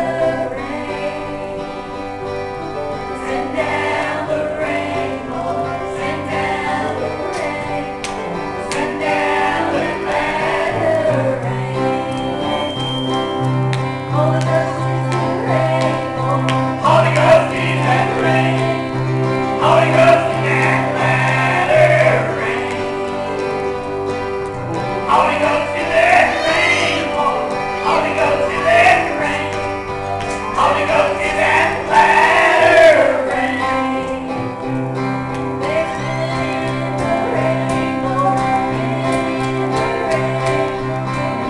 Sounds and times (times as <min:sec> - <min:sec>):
Music: 0:00.0 - 0:41.5.